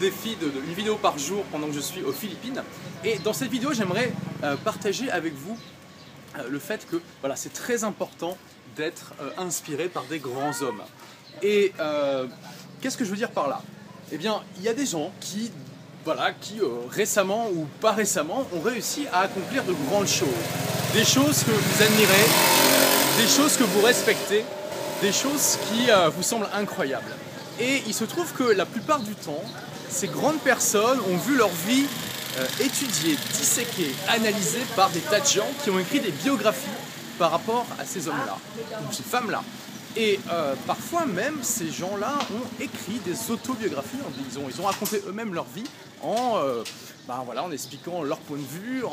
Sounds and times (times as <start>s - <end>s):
Speech: 0.0s - 5.6s, 6.4s - 22.4s, 23.2s - 48.9s.